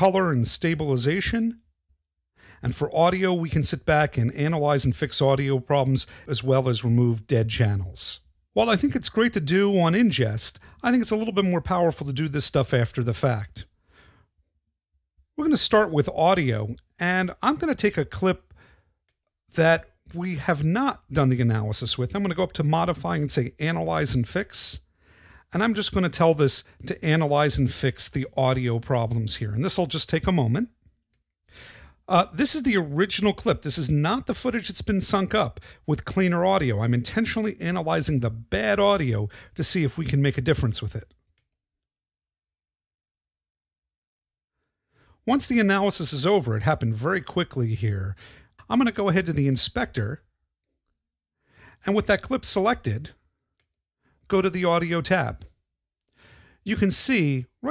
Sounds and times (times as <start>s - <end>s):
Speech: 0.0s - 1.6s, 2.6s - 13.7s, 15.4s - 18.5s, 19.5s - 24.9s, 25.5s - 30.8s, 32.1s - 41.1s, 45.3s - 50.3s, 51.8s - 53.2s, 54.3s - 55.5s, 56.6s - 57.7s.